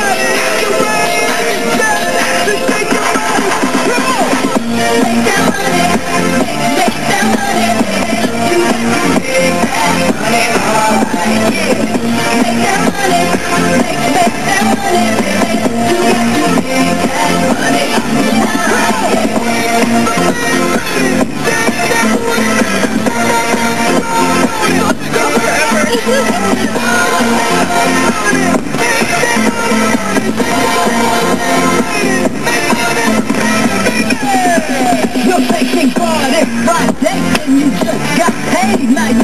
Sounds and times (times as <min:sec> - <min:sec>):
Techno: 0:00.0 - 0:39.2.